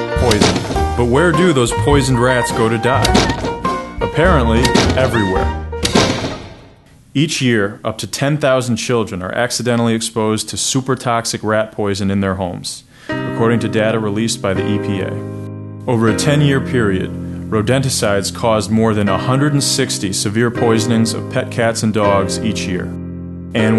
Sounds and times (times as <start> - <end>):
Music: 0.0 - 6.7, 13.0 - 23.7
Speech: 0.2 - 3.3, 4.0 - 5.5, 7.2 - 15.2, 15.9 - 23.0, 23.6 - 23.7.